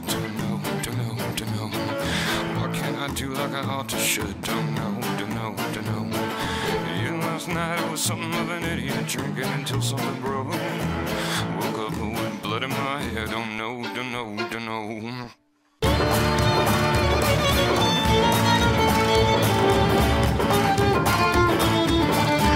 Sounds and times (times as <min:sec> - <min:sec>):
Jazz: 0:15.8 - 0:22.5.